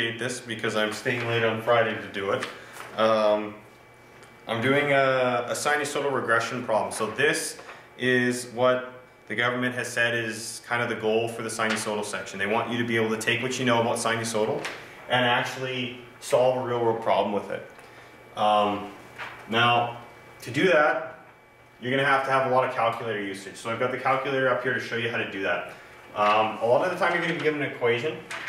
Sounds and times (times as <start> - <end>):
Speech: 0.0 - 3.6, 4.5 - 17.8, 18.4 - 28.3.